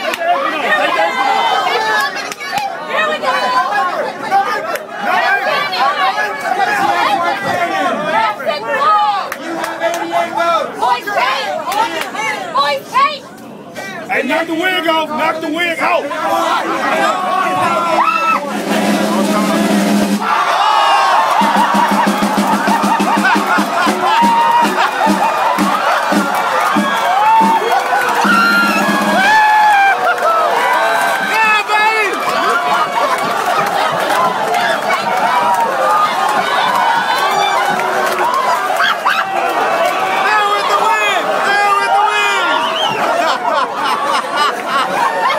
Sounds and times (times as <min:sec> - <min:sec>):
Crowd: 0:00.0 - 0:45.3
Music: 0:18.4 - 0:20.2, 0:21.4 - 0:29.4.